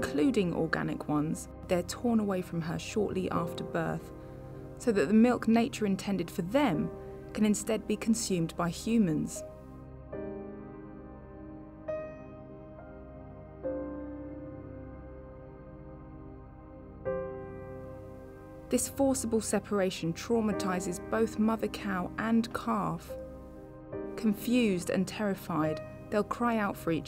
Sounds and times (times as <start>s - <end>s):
Speech: 0.0s - 4.1s, 4.8s - 9.4s, 18.7s - 23.2s, 24.2s - 27.0s
Music: 0.0s - 27.0s.